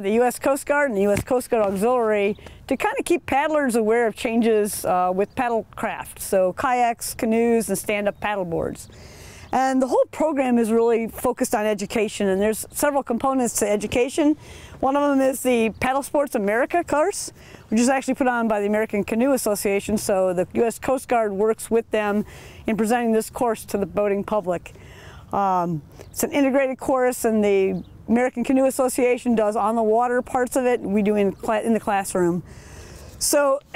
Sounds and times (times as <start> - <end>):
Speech: 0.0 - 8.9, 9.6 - 24.7, 25.3 - 32.4, 33.2 - 33.7.